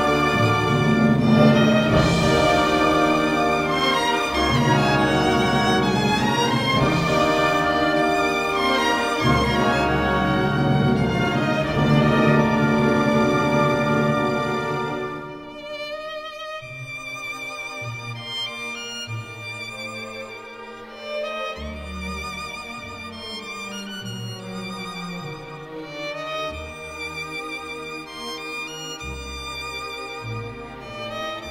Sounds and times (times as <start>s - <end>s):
Musical instrument: 0.0s - 15.8s.